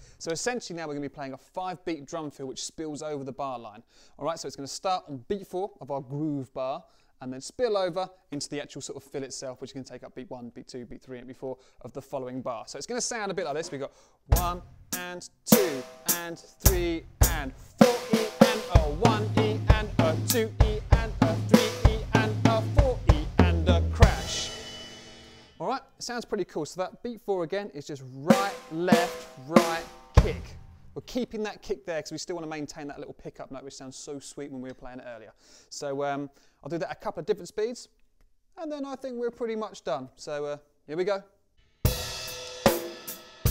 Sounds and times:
Drum kit: 0:13.5 - 0:25.6, 0:28.3 - 0:31.0, 0:41.8 - 0:43.5
Drum roll: 0:13.6 - 0:25.6, 0:28.3 - 0:31.0, 0:41.9 - 0:43.5
Cymbal: 0:24.0 - 0:25.6, 0:41.8 - 0:43.5.

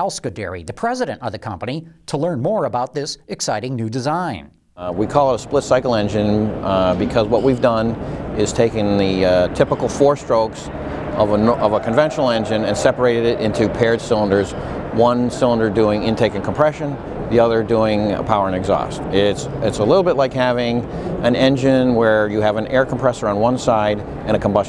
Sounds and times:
Speech: 0:00.0 - 0:24.6.

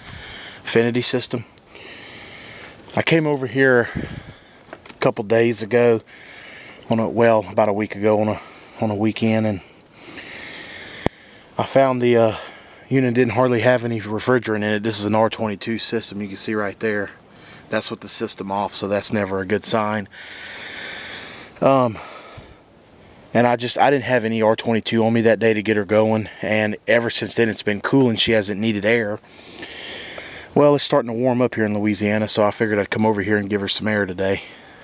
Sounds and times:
Speech: 0:00.6 - 0:01.5, 0:02.9 - 0:04.0, 0:05.0 - 0:06.1, 0:06.9 - 0:09.7, 0:11.6 - 0:20.1, 0:21.6 - 0:22.1, 0:23.4 - 0:29.2, 0:30.6 - 0:34.5.

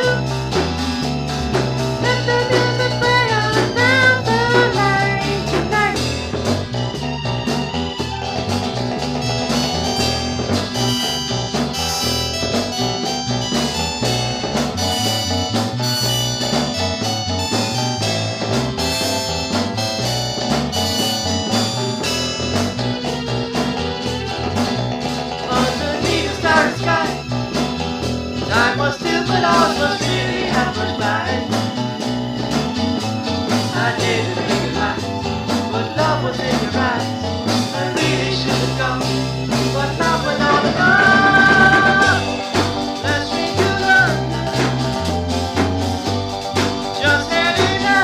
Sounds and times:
Music: 0:00.0 - 0:48.0.

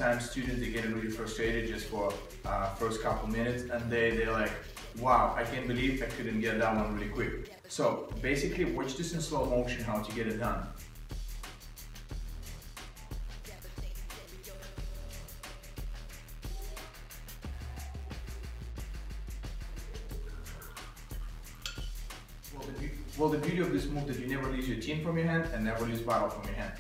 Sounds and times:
Music: 0:00.0 - 0:26.8.

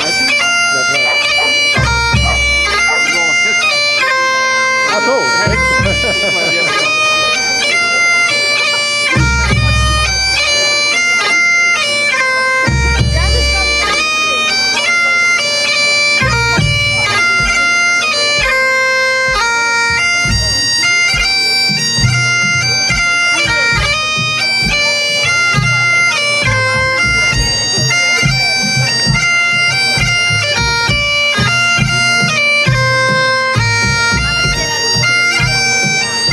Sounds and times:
Speech: 0:00.0 - 0:03.8, 0:04.9 - 0:09.1, 0:12.8 - 0:16.0, 0:16.6 - 0:18.4, 0:20.2 - 0:30.3, 0:33.8 - 0:36.3
Bagpipes: 0:00.0 - 0:36.3
Crowd: 0:00.0 - 0:36.3.

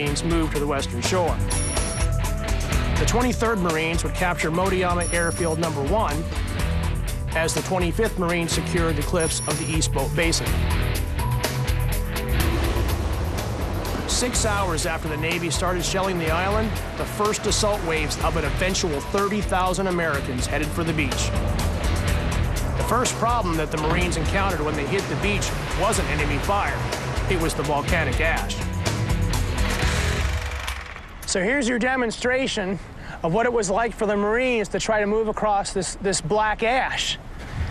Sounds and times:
Speech: 0:00.0 - 0:01.4, 0:03.0 - 0:06.2, 0:07.4 - 0:10.6, 0:14.1 - 0:21.3, 0:22.9 - 0:28.6, 0:31.3 - 0:37.2
Music: 0:00.0 - 0:30.8.

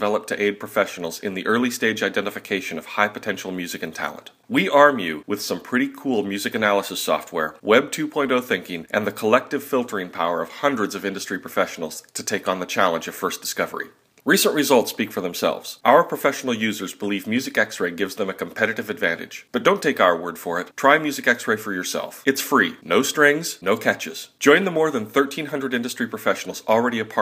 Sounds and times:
Speech: 0:00.0 - 0:27.2.

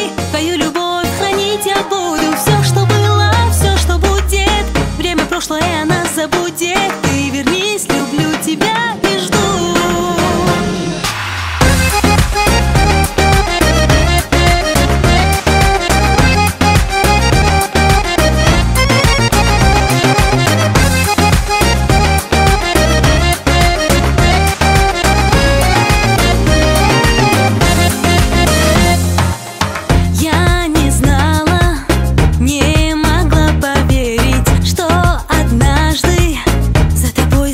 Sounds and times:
Exciting music: 0:00.0 - 0:33.4.

